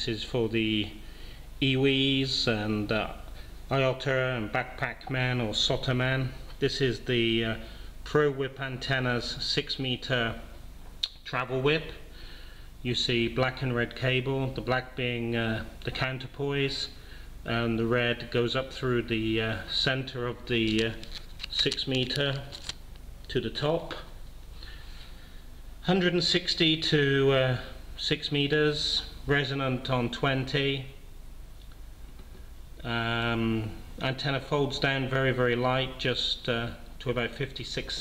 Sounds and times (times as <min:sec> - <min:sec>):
Speech: 0:00.0 - 0:01.0, 0:01.6 - 0:12.0, 0:12.8 - 0:22.6, 0:23.3 - 0:24.2, 0:25.8 - 0:31.0, 0:32.8 - 0:38.0.